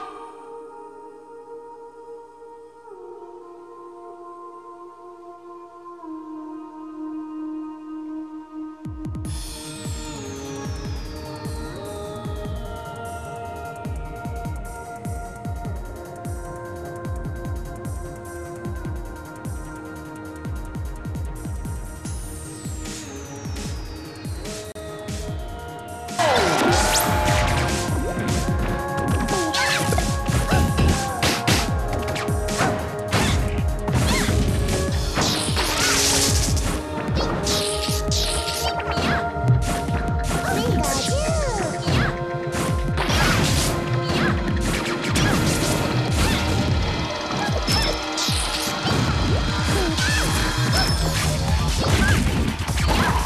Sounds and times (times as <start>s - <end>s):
Music: 0.0s - 53.2s.